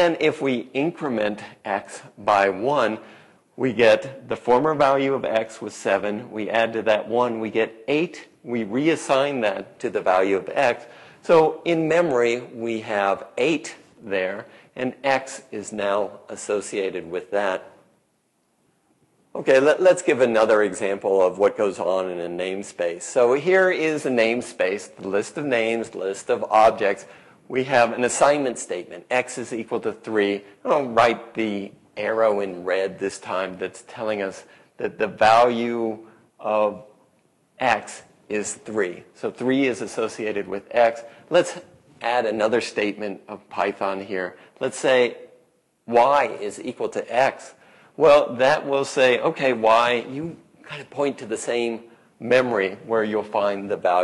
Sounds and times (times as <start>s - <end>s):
Speech: 0.0s - 17.8s, 19.4s - 37.0s, 37.6s - 45.3s, 45.9s - 54.0s.